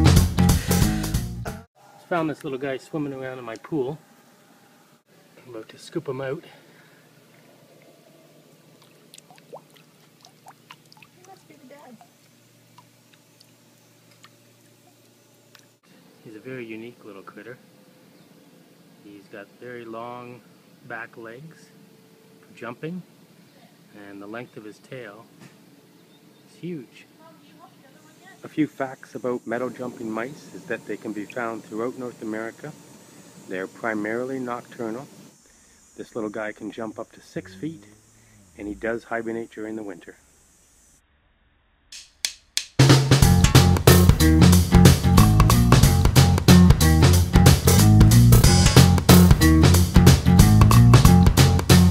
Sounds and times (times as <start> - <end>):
Speech: 2.0 - 4.0, 5.4 - 6.6, 16.2 - 17.6, 19.0 - 21.8, 22.6 - 25.3, 26.5 - 32.8, 33.5 - 35.1, 36.0 - 38.0, 38.6 - 40.2.